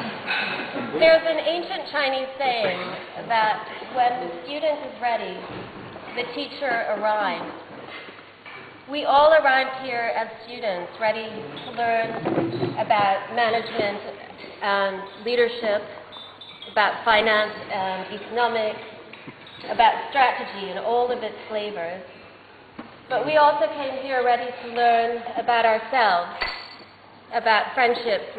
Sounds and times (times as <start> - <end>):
Narration, monologue: 0.4 - 28.3
Female speech, woman speaking: 1.0 - 5.5, 6.1 - 7.5, 8.9 - 15.9, 16.7 - 18.9, 19.7 - 22.1, 23.1 - 26.4, 27.3 - 28.3.